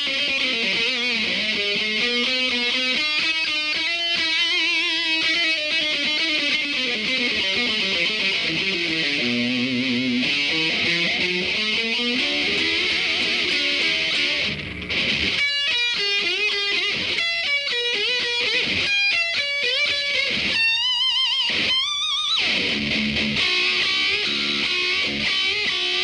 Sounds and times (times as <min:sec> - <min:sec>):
Electric guitar: 0:00.0 - 0:26.0.